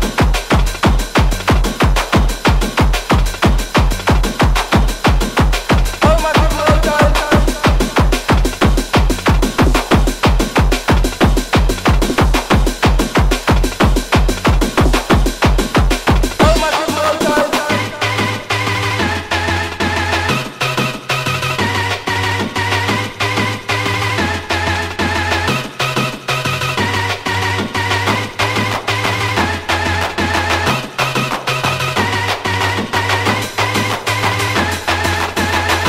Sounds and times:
Music: 0.0s - 35.8s.

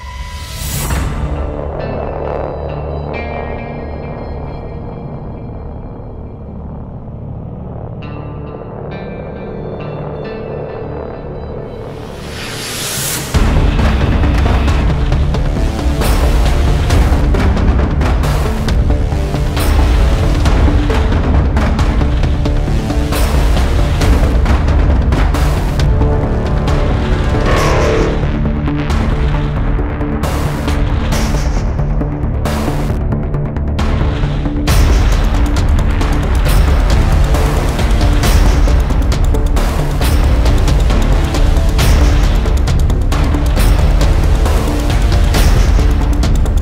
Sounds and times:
Soundtrack music: 25.4s - 29.3s
Theme music: 26.8s - 28.8s.

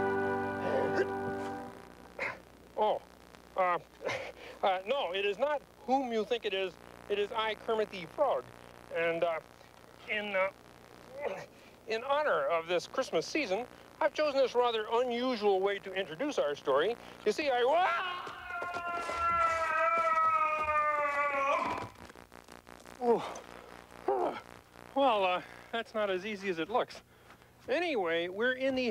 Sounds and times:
Speech: 2.8s - 3.9s, 4.6s - 9.4s, 10.0s - 10.5s, 11.1s - 18.2s, 25.0s - 27.0s, 27.7s - 28.9s.

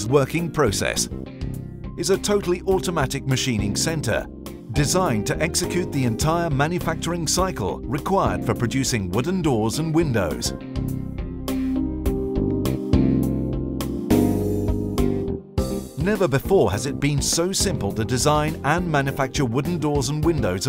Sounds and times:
Speech: 0.0s - 1.1s, 2.0s - 10.6s, 16.0s - 20.6s
Music: 0.0s - 20.6s.

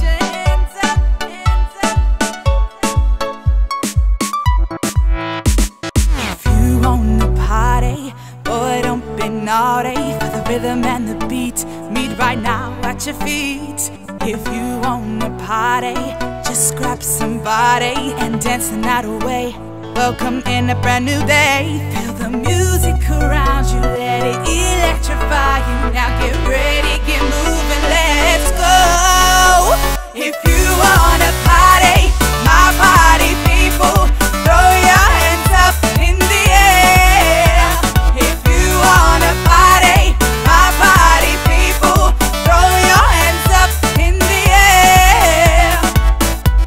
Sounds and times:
Music: 0.0s - 46.6s.

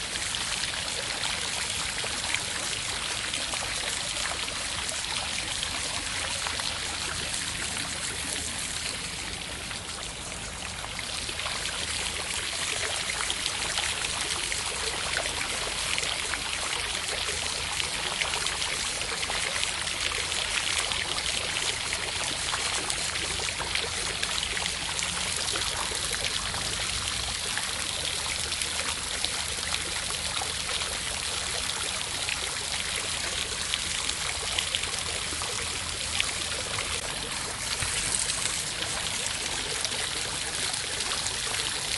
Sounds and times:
Outside, rural or natural: 0.0s - 41.9s.

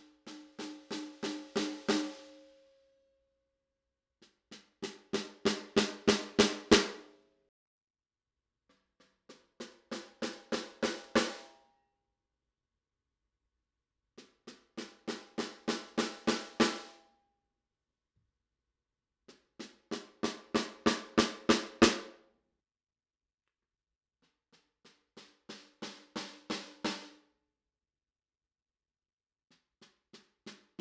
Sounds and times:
Drum: 0.0s - 2.3s, 4.2s - 7.1s, 8.9s - 11.4s, 14.2s - 16.9s, 19.3s - 22.2s, 24.4s - 27.2s, 29.6s - 30.8s.

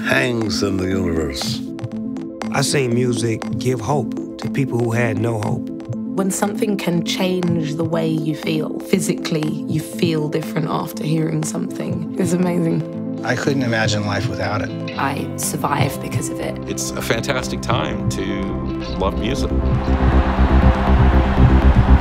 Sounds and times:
Speech: 0.0s - 1.6s, 2.6s - 5.6s, 6.2s - 19.6s
Music: 0.0s - 22.0s.

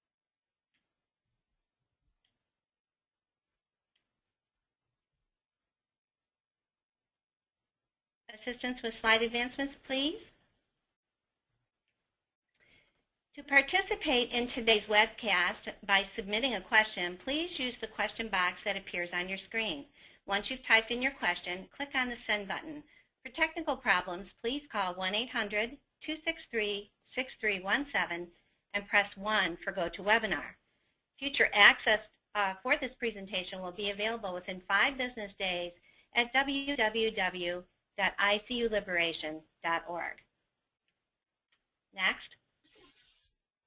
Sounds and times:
Speech: 8.3s - 10.3s, 13.4s - 30.6s, 31.2s - 40.3s, 42.0s - 42.4s.

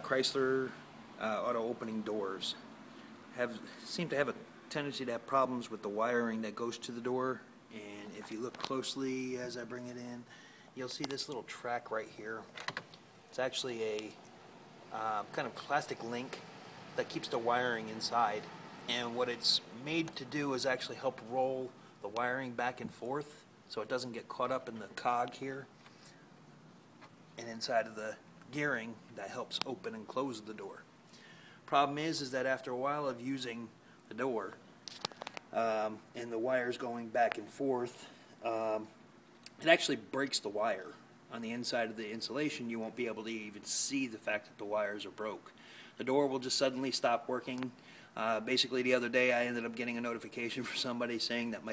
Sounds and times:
Speech: 0.0s - 2.6s, 3.4s - 12.5s, 13.3s - 14.2s, 14.9s - 16.4s, 17.0s - 25.7s, 27.4s - 30.9s, 31.7s - 34.6s, 35.5s - 51.7s.

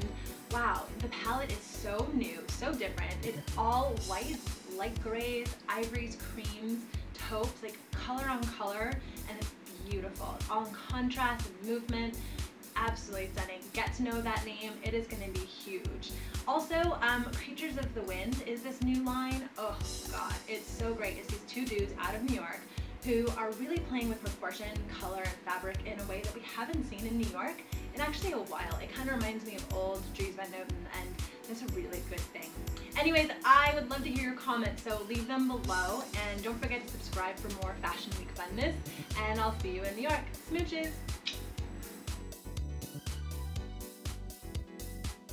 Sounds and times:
Speech: 0.0s - 12.2s, 12.8s - 41.4s
Music: 0.0s - 45.3s.

